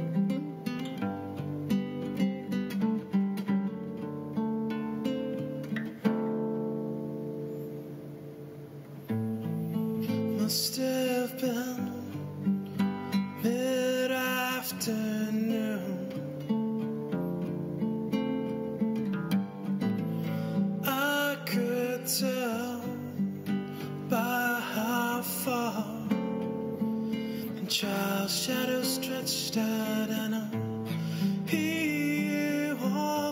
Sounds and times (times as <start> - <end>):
Acoustic guitar: 0.0 - 33.3.